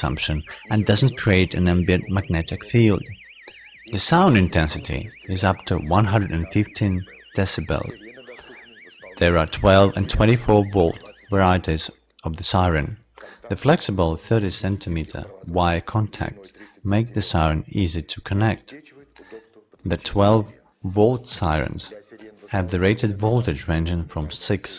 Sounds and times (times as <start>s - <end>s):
Speech: 0.0s - 3.2s, 3.9s - 24.7s.